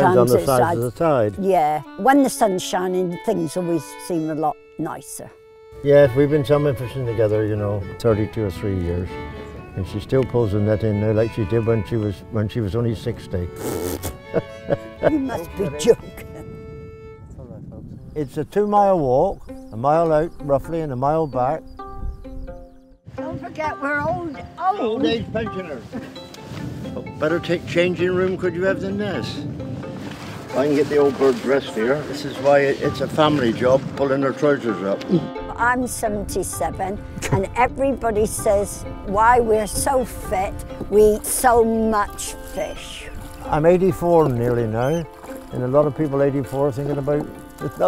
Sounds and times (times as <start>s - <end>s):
Music: 0.0s - 47.8s.